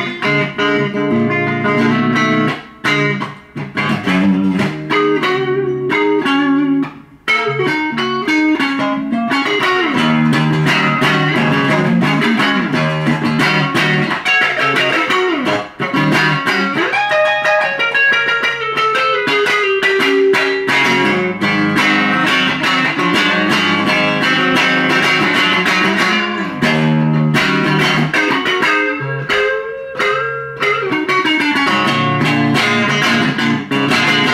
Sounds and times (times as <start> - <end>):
Electric guitar: 0.0 - 34.3.